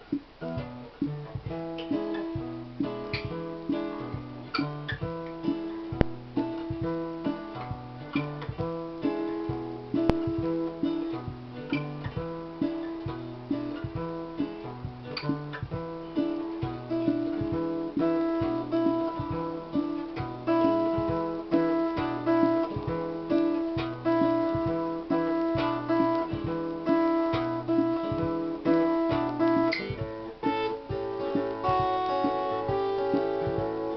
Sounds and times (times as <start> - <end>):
Blues: 0.0 - 33.9
Guitar: 0.0 - 33.9.